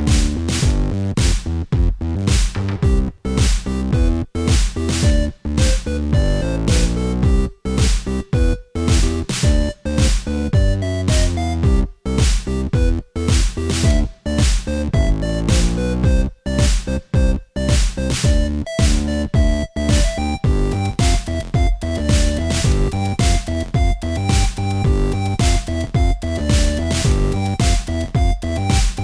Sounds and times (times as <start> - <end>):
Soundtrack music: 2.3 - 29.0
Video game music: 2.3 - 29.0.